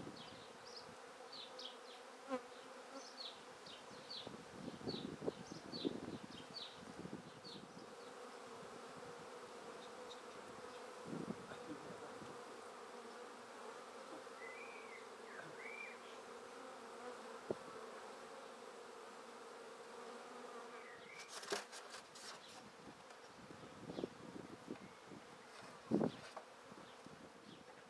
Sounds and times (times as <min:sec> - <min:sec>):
Bee, wasp, etc.: 0:00.0 - 0:27.8
Fly, housefly: 0:00.0 - 0:27.8.